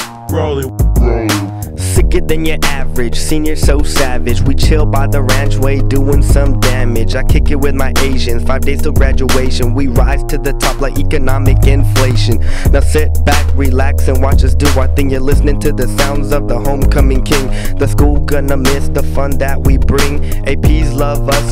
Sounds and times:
Funk: 0.0 - 21.5.

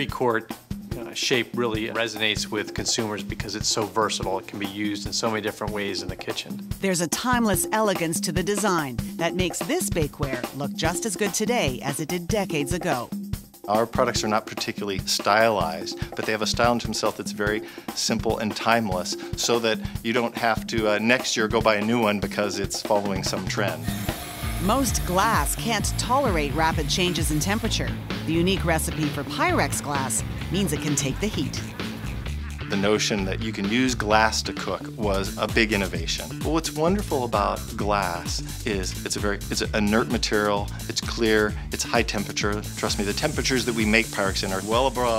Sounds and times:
Speech: 0.0 - 13.1, 13.7 - 23.8, 24.7 - 31.6, 32.7 - 45.1
Music: 0.0 - 45.1.

